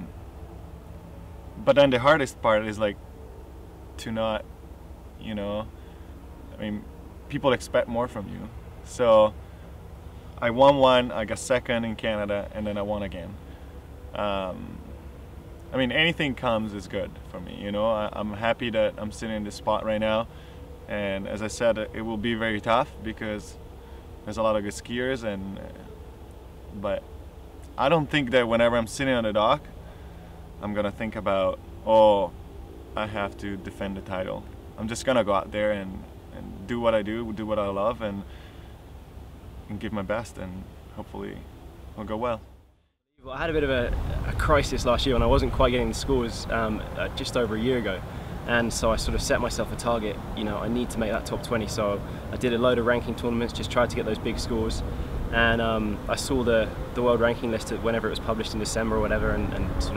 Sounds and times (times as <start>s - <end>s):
Speech: 1.6s - 3.0s, 4.0s - 4.4s, 5.2s - 5.7s, 6.6s - 9.4s, 10.4s - 13.4s, 14.1s - 14.9s, 15.7s - 20.3s, 20.9s - 23.6s, 24.3s - 25.9s, 26.8s - 27.0s, 27.8s - 29.7s, 30.6s - 32.3s, 33.0s - 38.3s, 39.7s - 42.4s, 43.2s - 59.9s.